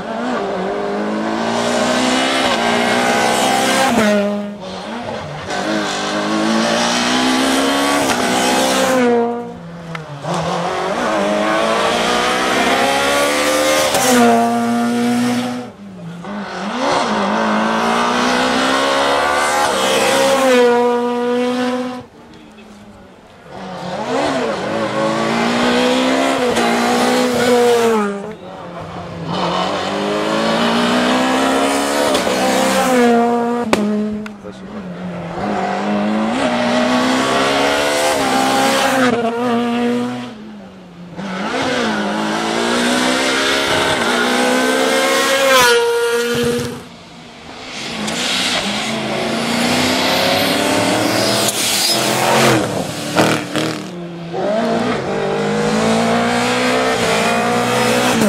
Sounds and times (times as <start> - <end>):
Race car, auto racing: 0.0 - 58.2.